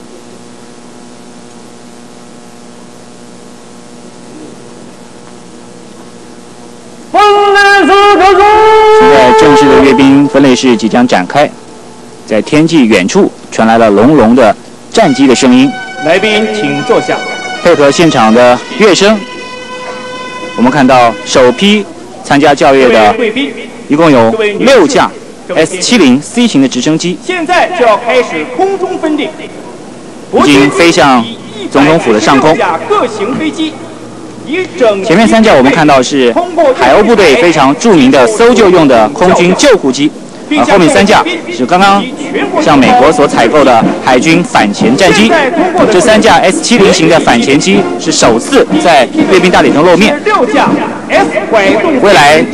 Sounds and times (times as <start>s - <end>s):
Speech: 7.1s - 11.6s, 12.3s - 19.2s, 20.6s - 29.6s, 30.3s - 33.8s, 34.5s - 52.5s.